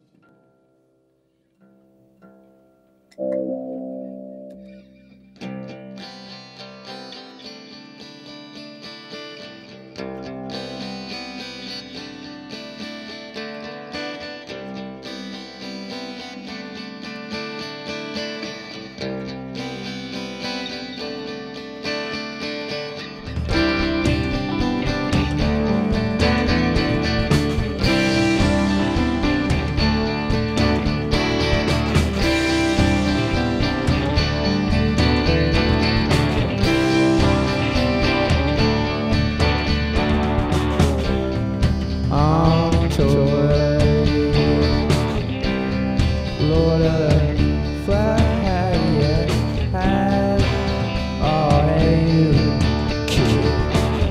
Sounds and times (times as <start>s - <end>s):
Guitar: 0.0s - 54.1s.